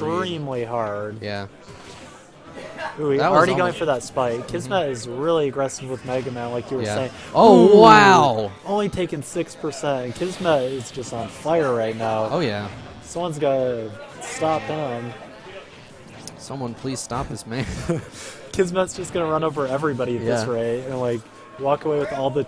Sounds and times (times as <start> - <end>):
Speech: 3.1 - 12.5.